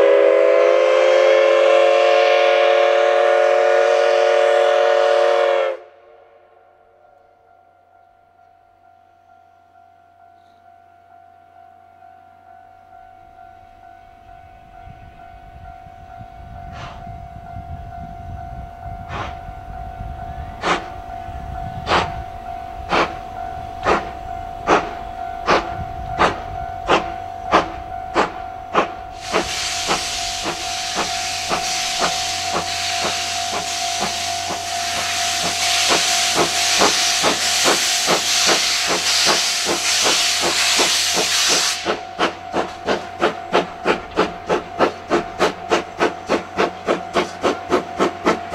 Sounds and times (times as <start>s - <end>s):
Hiss: 19.1s - 19.4s, 20.6s - 20.9s, 21.9s - 22.2s, 22.9s - 23.2s, 23.8s - 48.5s.